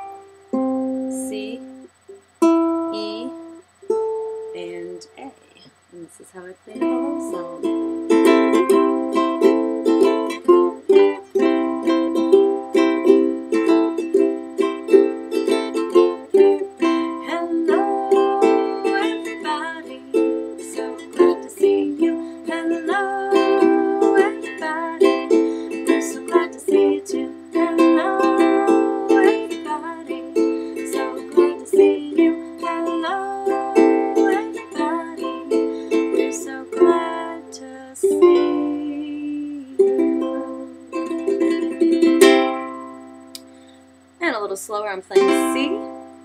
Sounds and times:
Music: 0:00.0 - 0:05.1, 0:06.7 - 0:43.9, 0:45.2 - 0:46.2
Speech: 0:02.9 - 0:03.4, 0:04.6 - 0:07.5, 0:44.2 - 0:45.8.

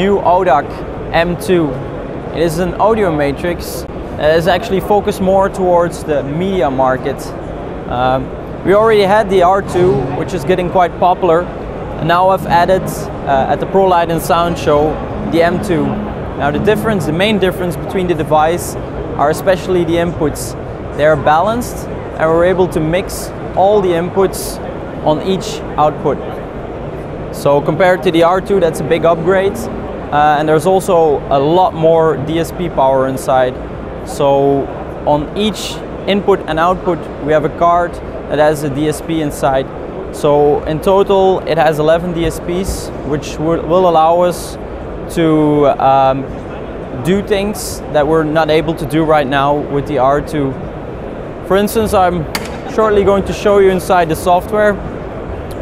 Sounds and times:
Speech: 0:00.0 - 0:26.4, 0:27.4 - 0:46.3, 0:46.9 - 0:50.6, 0:51.5 - 0:54.8.

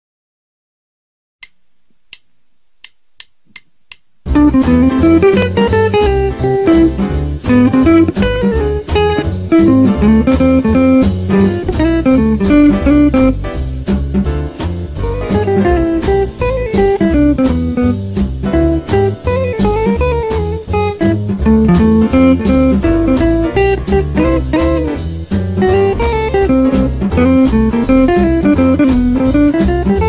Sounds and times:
Inside, small room: 0:01.4 - 0:30.0
Guitar: 0:04.3 - 0:30.0
Jazz: 0:04.3 - 0:30.0.

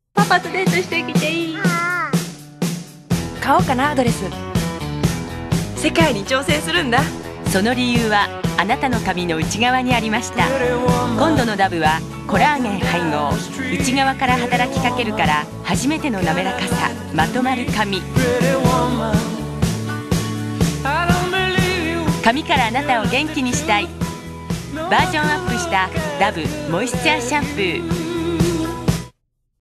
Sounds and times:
Music: 0:00.2 - 0:29.2
Speech: 0:03.4 - 0:04.4, 0:05.8 - 0:18.2, 0:22.2 - 0:23.9, 0:24.8 - 0:28.0.

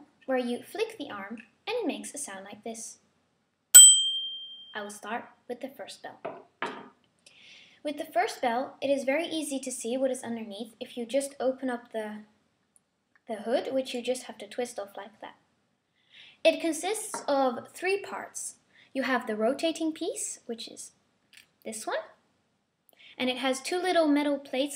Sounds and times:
Speech: 0:00.0 - 0:03.0, 0:04.8 - 0:06.3, 0:07.8 - 0:12.4, 0:13.3 - 0:15.4, 0:16.5 - 0:21.0, 0:21.6 - 0:22.2, 0:23.2 - 0:24.7.

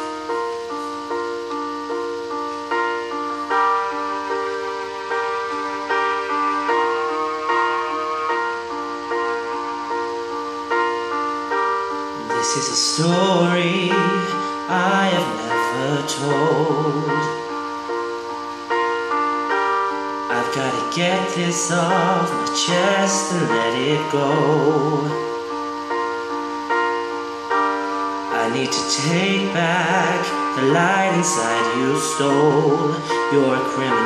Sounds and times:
Keyboard (musical): 0:00.0 - 0:34.0.

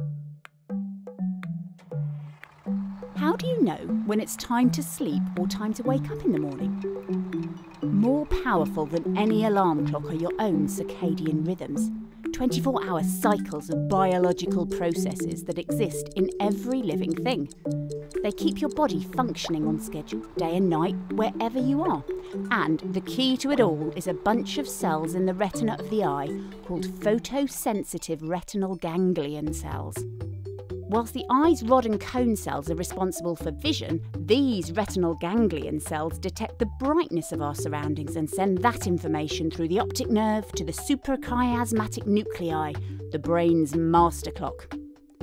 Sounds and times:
Music: 0:00.0 - 0:45.2
Speech: 0:03.2 - 0:06.7, 0:07.9 - 0:17.5, 0:18.2 - 0:30.0, 0:30.9 - 0:44.7.

